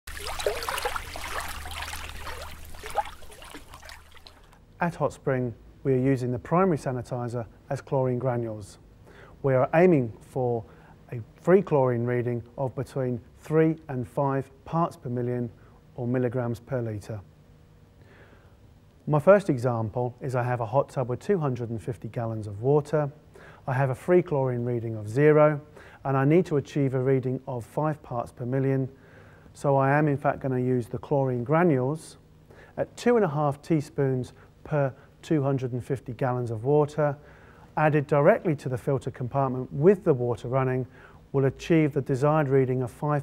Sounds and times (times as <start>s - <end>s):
Speech: 4.8s - 8.8s, 9.4s - 17.3s, 19.0s - 29.0s, 29.6s - 32.2s, 32.8s - 37.2s, 37.8s - 43.2s.